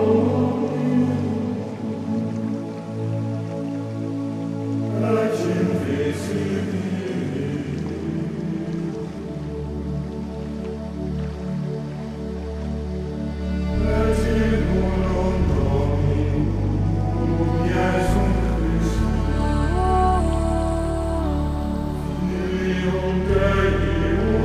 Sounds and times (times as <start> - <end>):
Mantra: 0.0 - 2.3, 4.9 - 9.3, 13.6 - 24.4.